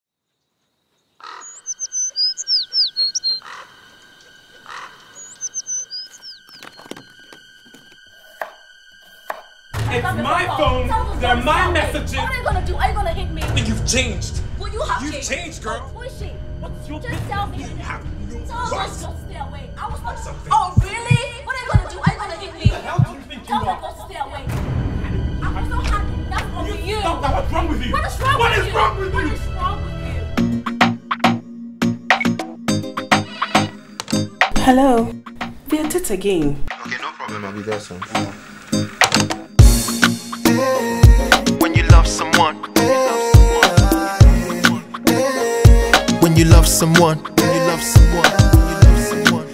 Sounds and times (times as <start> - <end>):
Chirp, tweet: 0.3 - 3.6, 4.6 - 6.9.